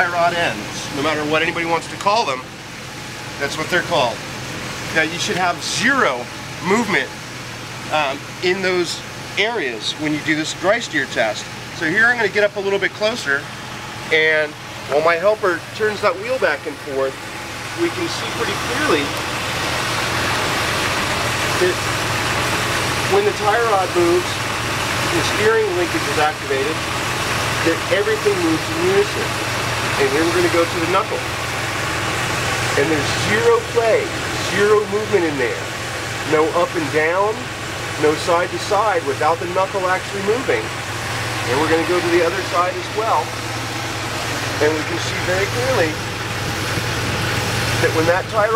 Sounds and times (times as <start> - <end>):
Speech: 0.0 - 2.5, 3.4 - 4.2, 4.9 - 7.2, 7.9 - 13.5, 14.1 - 17.2, 17.8 - 19.2, 21.5 - 21.9, 23.1 - 24.4, 25.0 - 26.8, 27.6 - 29.4, 30.0 - 31.3, 32.7 - 40.7, 41.4 - 43.4, 44.5 - 46.0, 47.8 - 48.5
Engine: 0.0 - 48.5
Vehicle: 0.0 - 48.5.